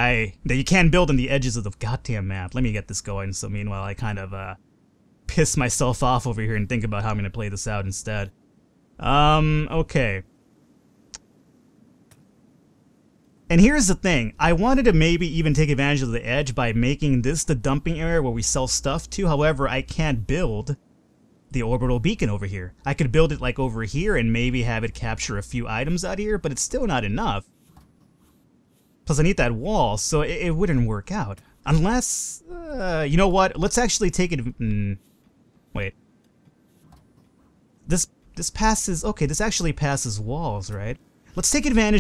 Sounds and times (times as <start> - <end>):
Speech: 0.0 - 4.6, 5.3 - 8.3, 9.0 - 10.3, 13.5 - 20.8, 21.5 - 27.4, 29.1 - 35.0, 35.8 - 36.0, 37.9 - 42.0.